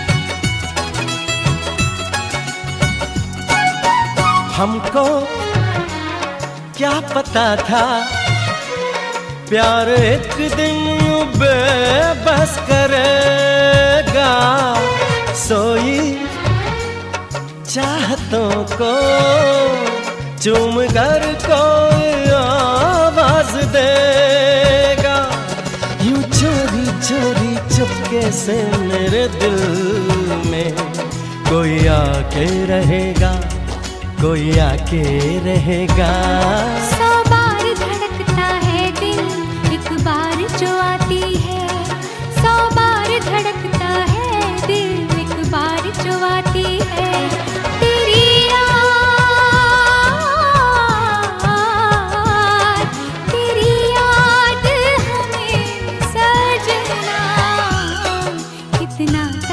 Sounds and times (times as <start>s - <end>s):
Music of Bollywood: 0.0s - 59.5s
Singing: 34.2s - 59.5s.